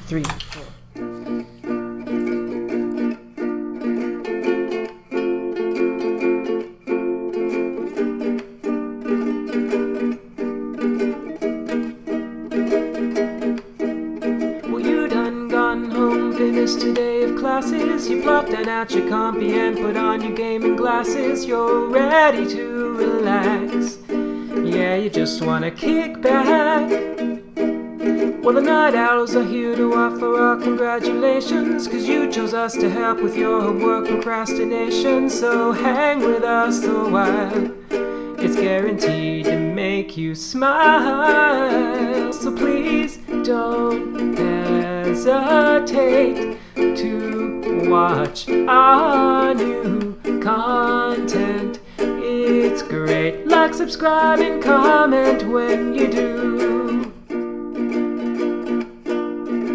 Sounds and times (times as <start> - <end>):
Ukulele: 0.9 - 59.7.